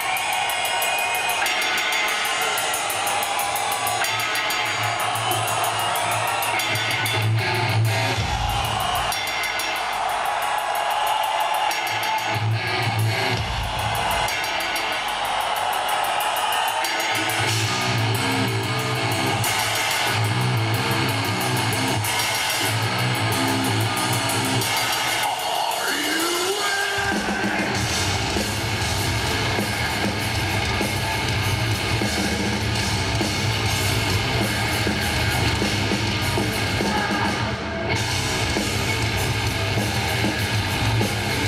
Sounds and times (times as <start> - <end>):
Heavy metal: 0.0 - 41.4.